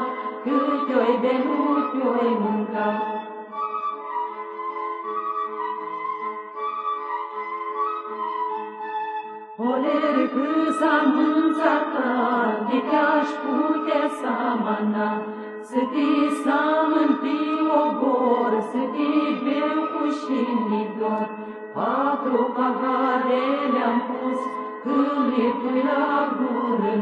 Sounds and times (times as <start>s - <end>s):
Music: 0.0s - 27.0s.